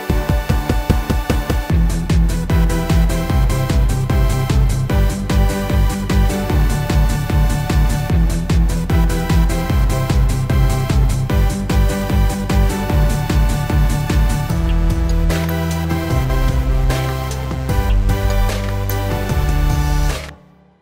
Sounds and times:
Techno: 0.0 - 20.4.

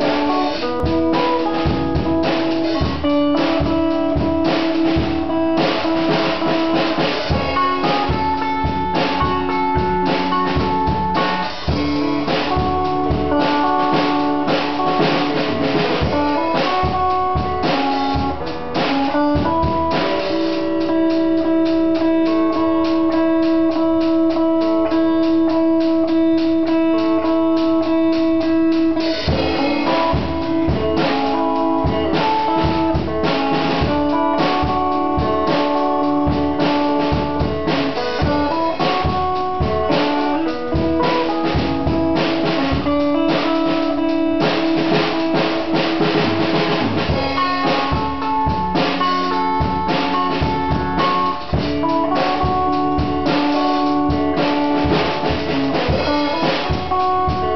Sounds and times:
Strum: 0.0 - 57.5.

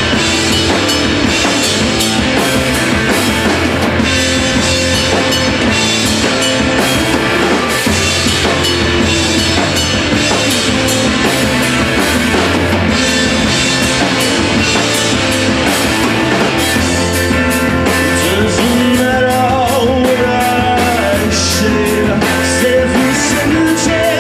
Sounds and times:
Music: 0.0 - 24.2.

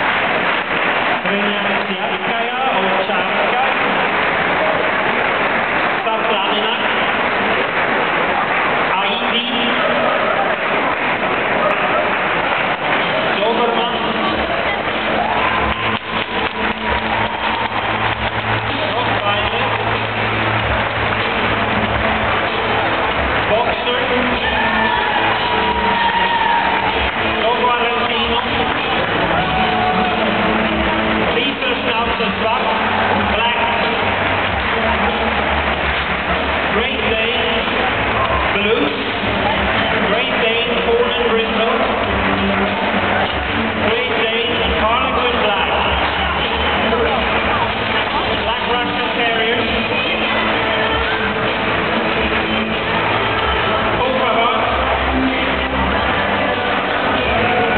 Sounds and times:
Music: 0.0 - 57.7
Speech: 1.2 - 3.9, 6.0 - 7.0, 8.9 - 10.2, 13.3 - 14.9, 18.7 - 19.8, 23.5 - 24.7, 27.4 - 29.2, 31.3 - 34.1, 36.7 - 42.0, 43.8 - 52.5, 53.9 - 57.7.

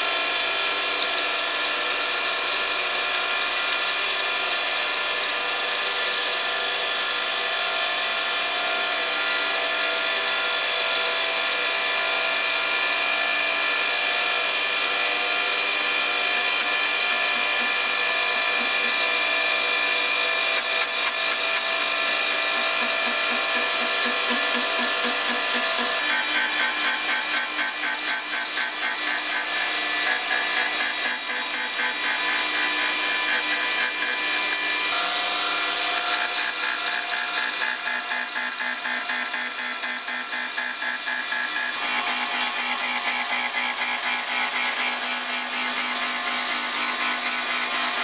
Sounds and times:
Tools: 15.0 - 48.0.

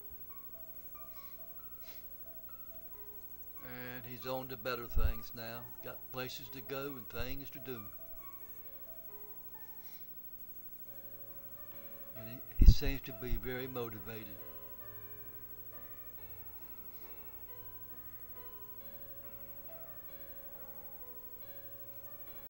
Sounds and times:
Music: 0.0 - 22.4
Speech: 3.7 - 8.0, 12.2 - 14.4.

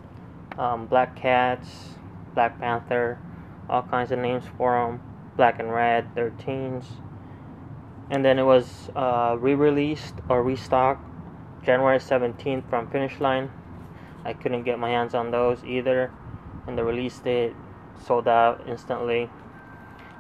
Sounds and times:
Speech: 0.6 - 7.0, 8.1 - 11.0, 11.7 - 13.5, 14.2 - 16.1, 16.7 - 19.3.

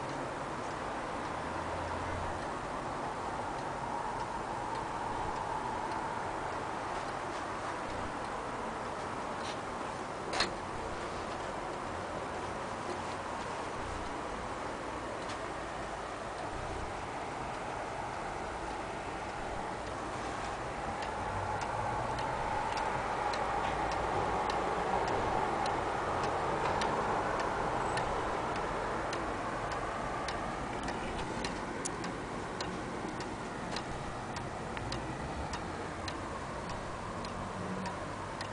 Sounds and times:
Tick-tock: 0.0 - 8.4, 12.9 - 14.3, 16.3 - 38.5
Tick: 21.0 - 29.3, 30.3 - 38.5.

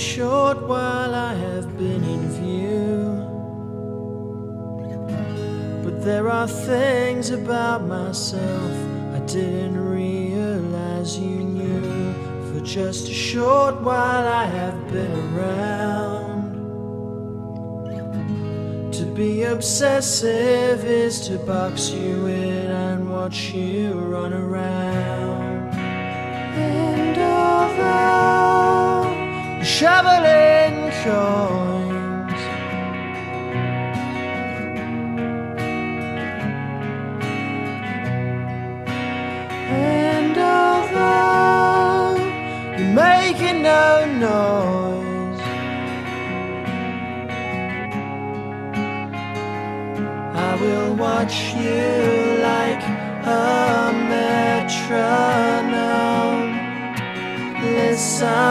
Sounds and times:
Tender music: 0.0 - 58.5.

